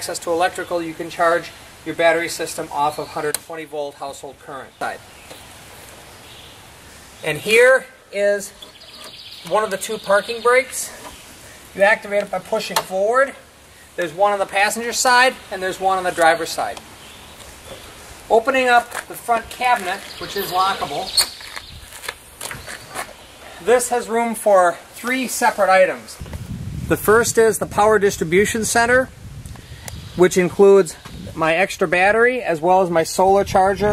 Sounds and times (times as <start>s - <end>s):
Speech: 0.0s - 5.0s, 7.2s - 8.6s, 9.4s - 11.0s, 11.8s - 13.4s, 14.0s - 16.8s, 18.3s - 21.3s, 23.6s - 26.2s, 26.9s - 29.1s, 30.2s - 33.9s
Outside, rural or natural: 0.0s - 33.9s.